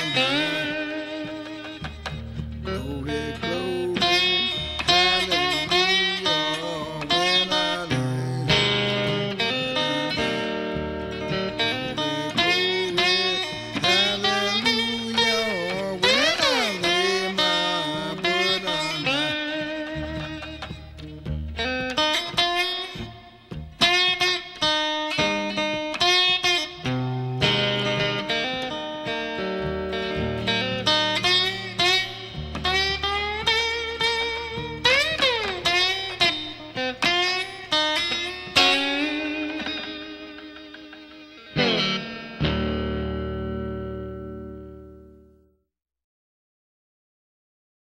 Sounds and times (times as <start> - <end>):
Steel guitar, slide guitar: 0.0 - 45.5.